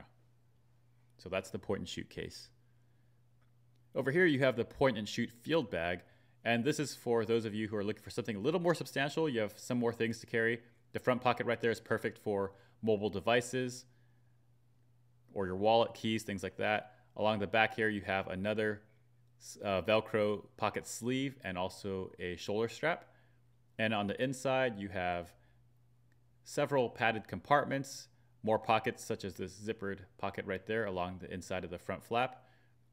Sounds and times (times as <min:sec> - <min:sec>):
Speech: 0:01.2 - 0:02.6, 0:03.9 - 0:13.9, 0:15.3 - 0:23.1, 0:23.8 - 0:25.4, 0:26.4 - 0:32.4.